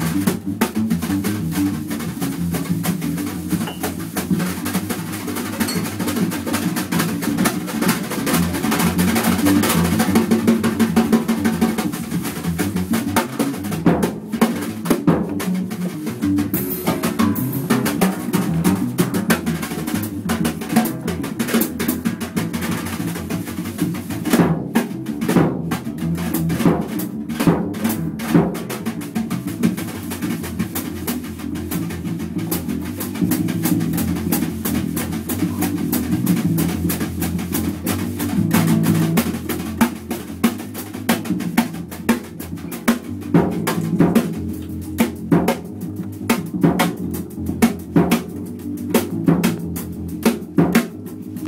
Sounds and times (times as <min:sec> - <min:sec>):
Bass drum: 0:00.0 - 0:51.4
Drum kit: 0:00.0 - 0:51.4
Drum roll: 0:00.0 - 0:51.4.